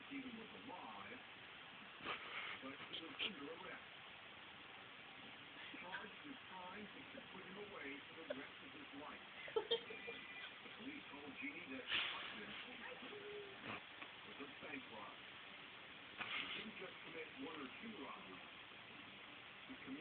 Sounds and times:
Speech: 0.0s - 1.2s, 2.6s - 3.8s, 5.7s - 9.2s, 10.1s - 13.6s, 14.3s - 15.2s, 16.4s - 18.5s, 19.7s - 20.0s.

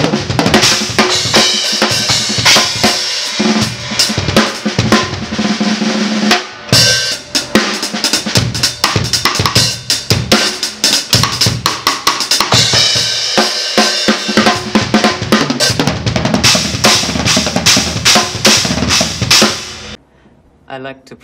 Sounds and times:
Bass drum: 0.0s - 5.5s, 14.2s - 20.0s
Drum kit: 0.0s - 20.0s.

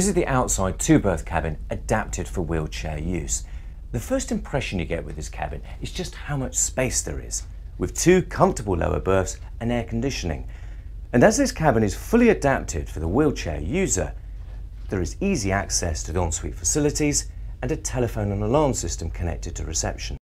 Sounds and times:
Speech: 0.0s - 10.5s, 11.1s - 14.2s, 14.9s - 20.2s.

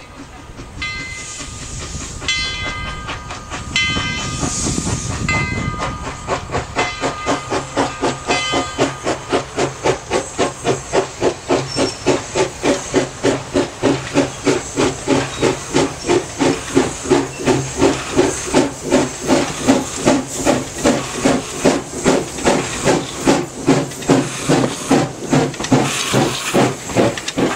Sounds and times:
Hiss: 1.0s - 27.5s.

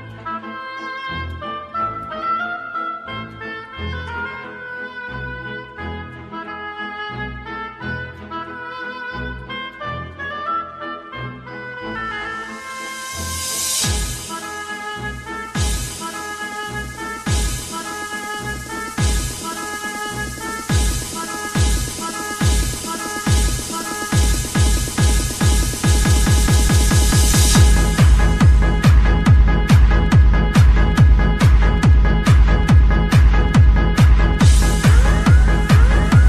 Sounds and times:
Techno: 0.0s - 36.2s.

